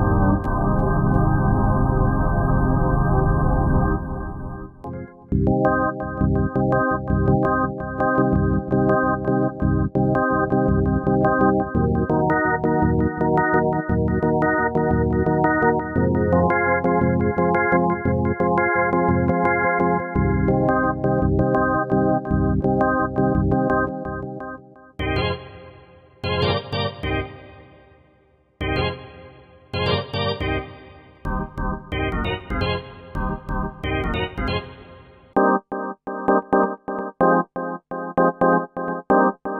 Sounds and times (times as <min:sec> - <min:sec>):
Music: 0:00.0 - 0:39.5.